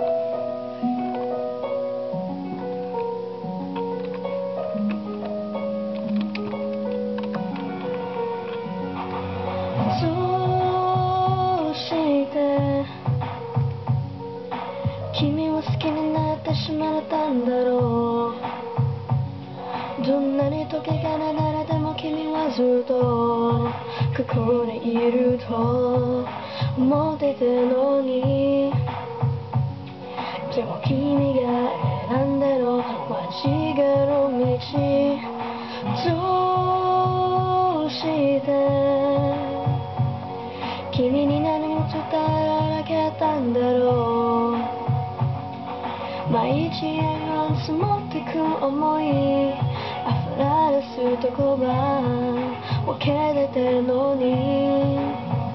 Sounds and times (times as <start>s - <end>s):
Music: 0.0s - 55.5s
Female singing: 9.8s - 13.1s, 15.1s - 18.7s, 20.0s - 29.1s, 30.4s - 39.8s, 40.8s - 44.9s, 46.2s - 55.5s.